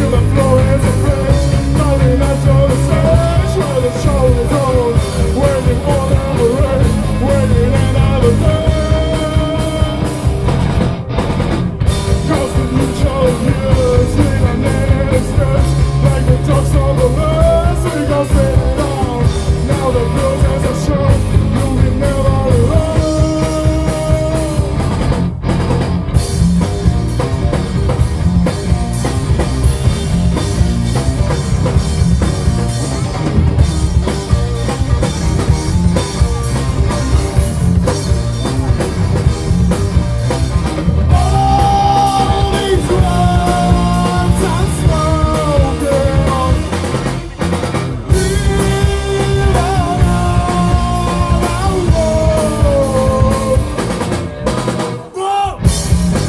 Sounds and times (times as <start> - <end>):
Music: 0.0 - 56.2.